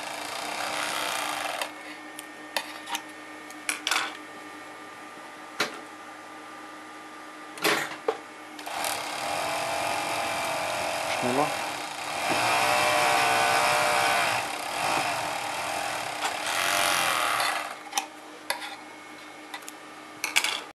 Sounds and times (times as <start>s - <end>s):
Speech: 11.1s - 11.6s
Tools: 16.2s - 18.8s.